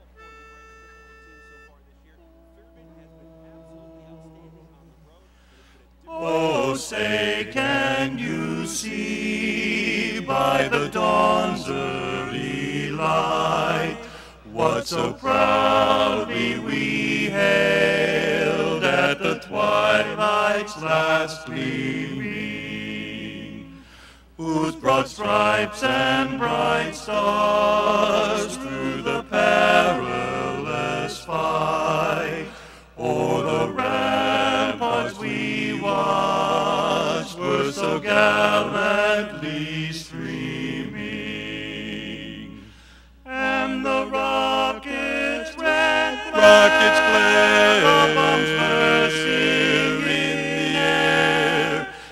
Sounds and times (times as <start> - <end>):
Choir: 6.0 - 23.8, 24.4 - 52.1
Male singing: 6.1 - 14.0, 24.4 - 41.1, 43.3 - 51.9.